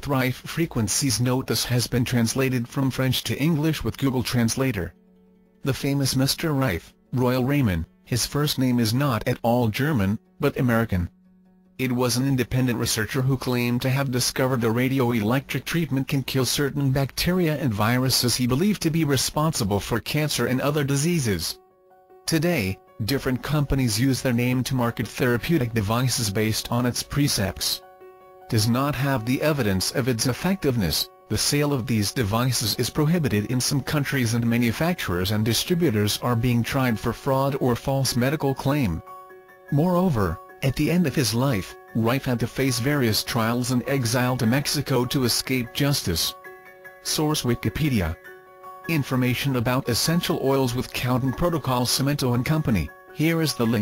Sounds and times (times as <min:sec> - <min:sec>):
Speech: 0:00.0 - 0:05.0, 0:05.6 - 0:11.1, 0:11.8 - 0:21.6, 0:22.3 - 0:27.8, 0:28.5 - 0:39.0, 0:39.7 - 0:46.4, 0:47.0 - 0:48.2, 0:48.9 - 0:53.8.